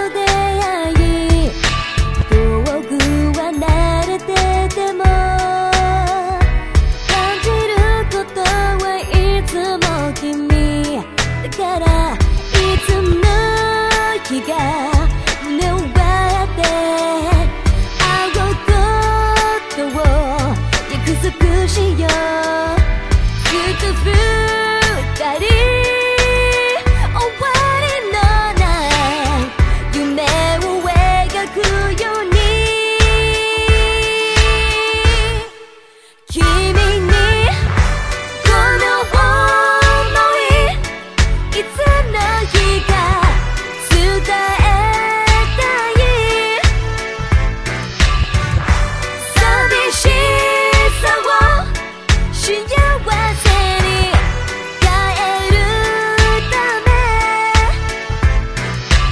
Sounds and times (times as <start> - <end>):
Music: 0.0 - 59.1.